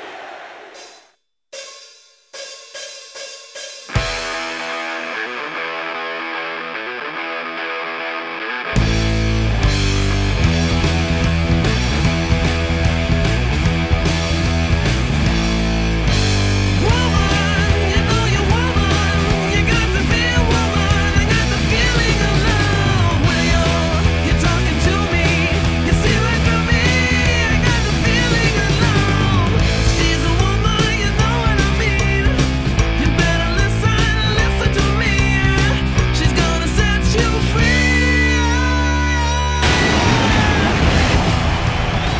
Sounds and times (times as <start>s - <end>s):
Bass guitar: 3.9s - 42.1s
Electric guitar: 3.9s - 42.1s.